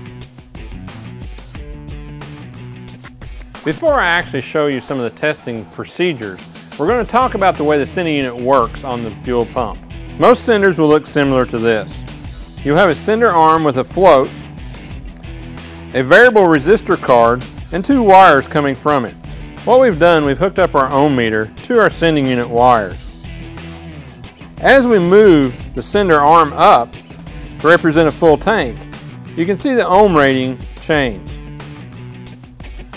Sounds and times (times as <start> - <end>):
Music: 0.0 - 32.9
Speech: 3.7 - 12.0, 12.6 - 14.3, 16.0 - 23.0, 24.6 - 26.9, 27.6 - 28.8, 29.4 - 31.4.